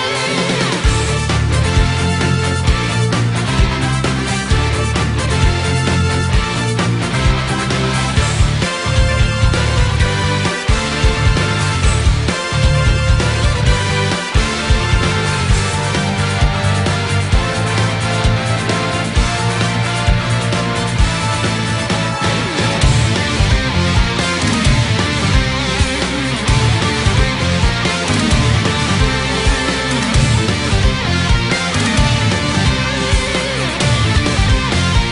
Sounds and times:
Soundtrack music: 0:00.0 - 0:35.1.

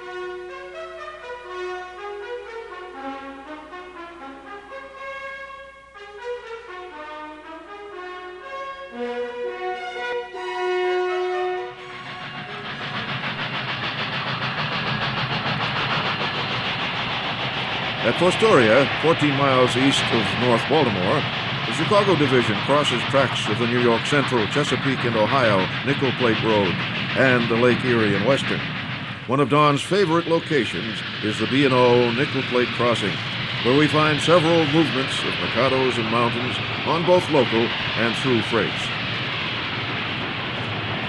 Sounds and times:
Speech: 0:18.0 - 0:28.6, 0:29.3 - 0:39.0.

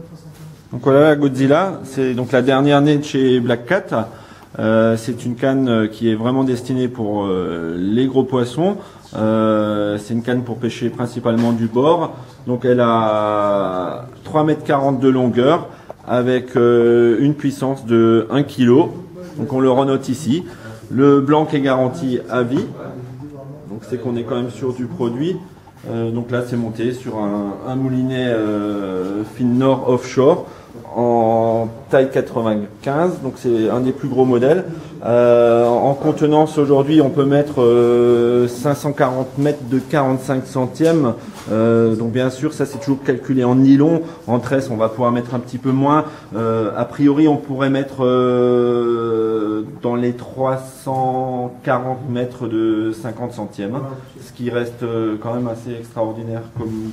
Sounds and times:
Speech: 0:00.0 - 0:56.9.

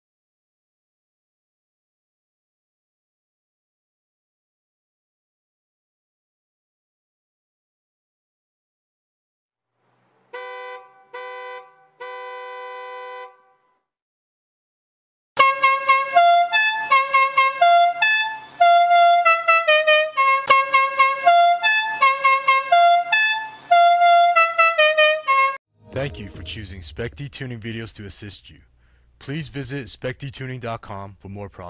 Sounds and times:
Music: 0:25.7 - 0:26.9
Speech: 0:25.9 - 0:31.6.

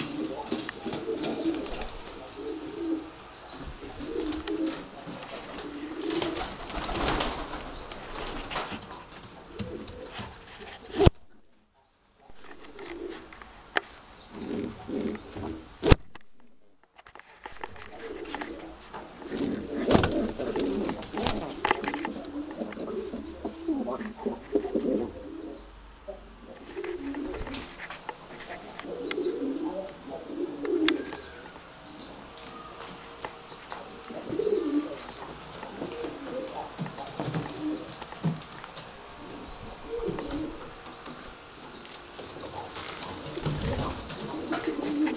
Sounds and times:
Pigeon, dove: 0:00.0 - 0:11.2, 0:12.3 - 0:15.8, 0:17.6 - 0:45.1.

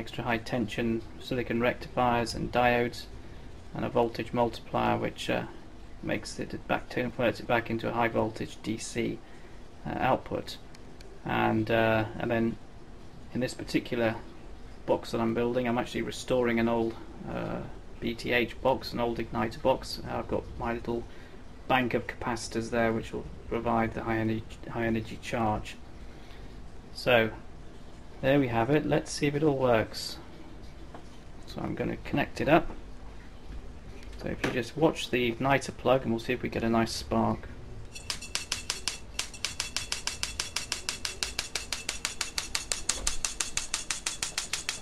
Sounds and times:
Speech: 0:00.0 - 0:03.1, 0:03.8 - 0:09.2, 0:09.8 - 0:10.6, 0:11.2 - 0:12.6, 0:13.3 - 0:14.2, 0:14.9 - 0:21.1, 0:21.7 - 0:25.8, 0:27.0 - 0:27.4, 0:28.2 - 0:30.3, 0:31.5 - 0:32.8, 0:34.2 - 0:37.5.

